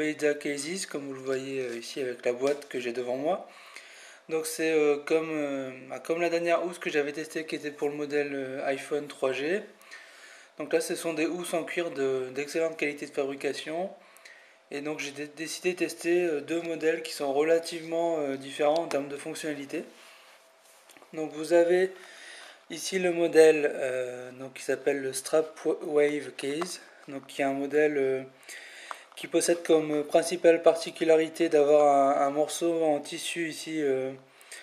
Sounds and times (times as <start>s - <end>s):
Speech: 0.0s - 3.5s, 4.3s - 9.8s, 10.6s - 14.0s, 14.7s - 20.0s, 21.1s - 22.0s, 22.7s - 28.4s, 29.2s - 34.3s.